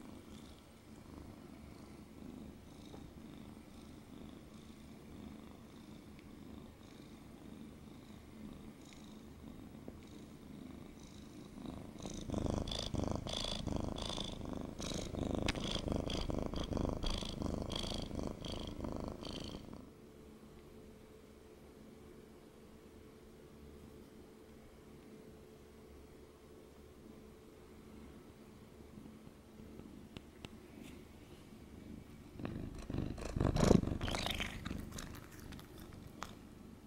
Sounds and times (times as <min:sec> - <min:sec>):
Purr: 0:00.0 - 0:20.0, 0:31.8 - 0:36.8.